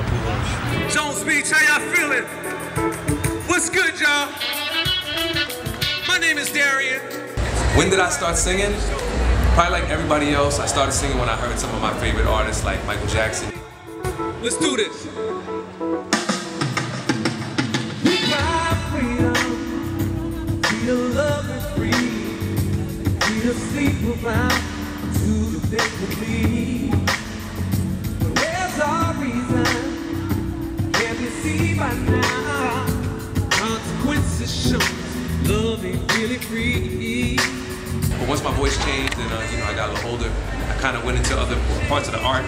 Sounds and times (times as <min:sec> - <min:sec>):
Music: 0:00.0 - 0:42.4.